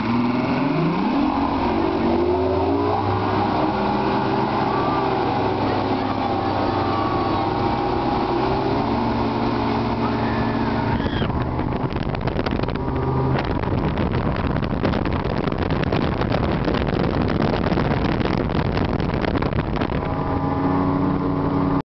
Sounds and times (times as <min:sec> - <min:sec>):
Motorboat, speedboat: 0:00.0 - 0:21.8.